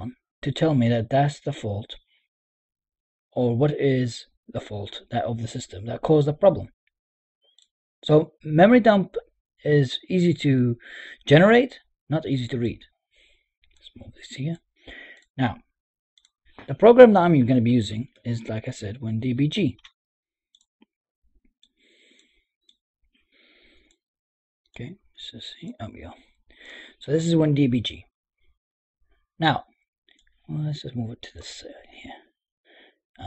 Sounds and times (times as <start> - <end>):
Speech: 0.0 - 2.0, 3.4 - 6.7, 8.0 - 12.9, 13.8 - 14.6, 15.4 - 15.6, 16.6 - 19.9, 24.8 - 26.3, 26.9 - 28.1, 29.4 - 29.7, 30.5 - 32.3
Clicking: 14.9 - 15.3, 16.2 - 16.4, 19.8 - 20.7.